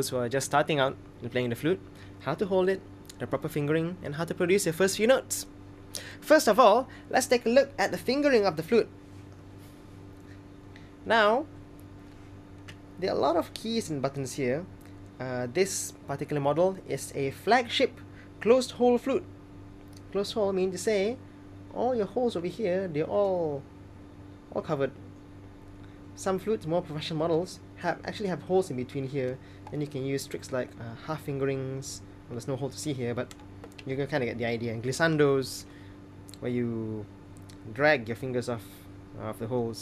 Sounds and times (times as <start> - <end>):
Speech: 0.0 - 5.5, 6.2 - 8.9, 11.0 - 11.5, 13.0 - 19.3, 20.0 - 23.7, 24.5 - 25.0, 26.2 - 35.7, 36.3 - 39.8.